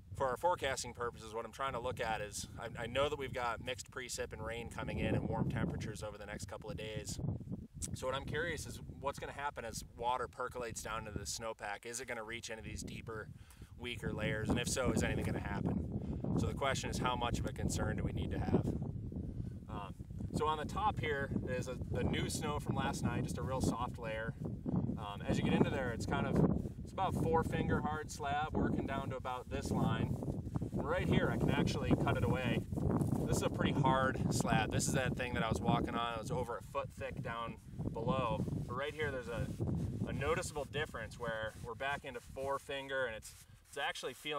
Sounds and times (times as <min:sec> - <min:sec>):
Speech: 0:00.2 - 0:07.2, 0:07.8 - 0:15.8, 0:16.4 - 0:18.7, 0:19.7 - 0:24.4, 0:25.0 - 0:30.1, 0:30.8 - 0:32.6, 0:33.3 - 0:39.5, 0:40.1 - 0:44.3.